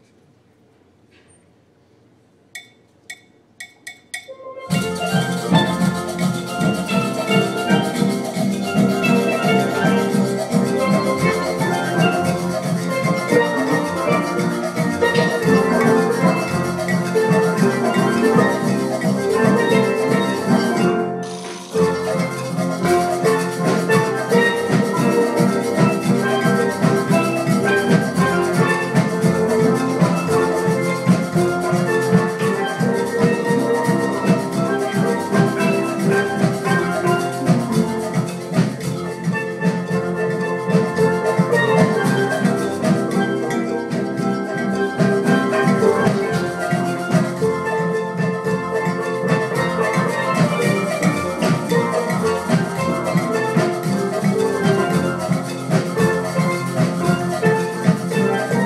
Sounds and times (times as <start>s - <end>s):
Drum: 2.6s - 58.6s
Drum kit: 3.6s - 58.6s.